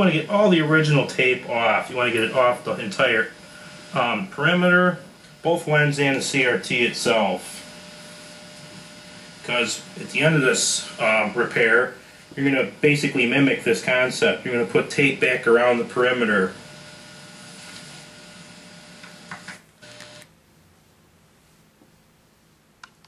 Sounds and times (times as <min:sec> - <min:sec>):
Speech: 0:00.0 - 0:03.4, 0:04.0 - 0:07.6, 0:09.4 - 0:16.6.